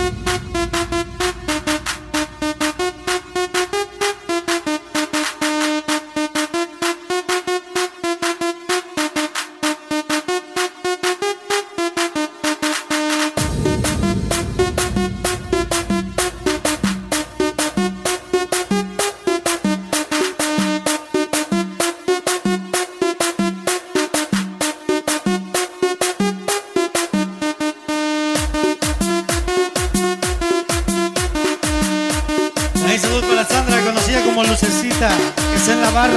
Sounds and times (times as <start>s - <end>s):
Music: 0.0s - 36.1s.